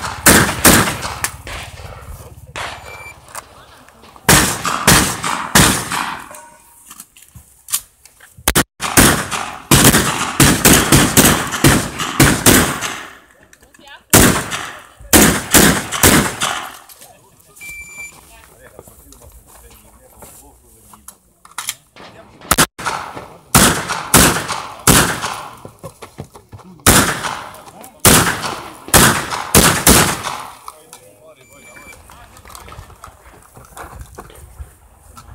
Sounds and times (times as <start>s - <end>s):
Gunshot, gunfire: 0.0s - 1.8s, 4.3s - 6.4s, 8.5s - 13.2s, 14.1s - 16.8s, 22.5s - 25.6s, 26.8s - 30.6s.